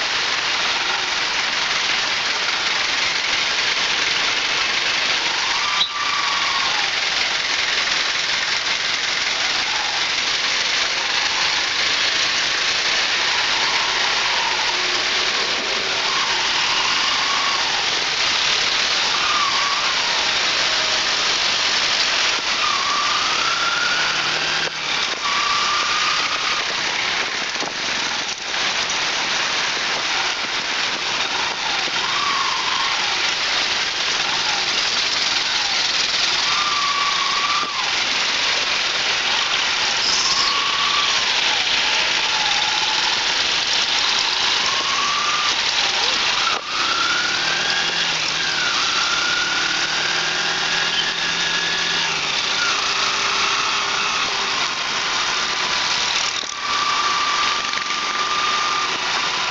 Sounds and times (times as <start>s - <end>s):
Car: 0.0s - 59.5s
Traffic noise, roadway noise: 0.0s - 59.5s.